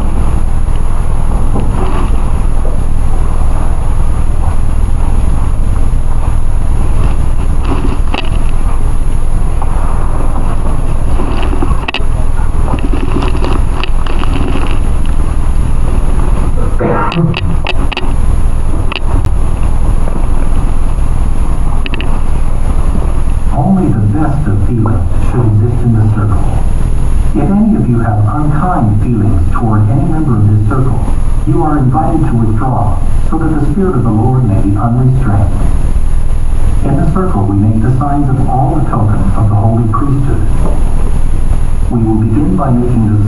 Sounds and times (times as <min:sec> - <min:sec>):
Speech: 0:23.6 - 0:26.7, 0:27.4 - 0:35.7, 0:36.8 - 0:40.6, 0:41.9 - 0:43.2.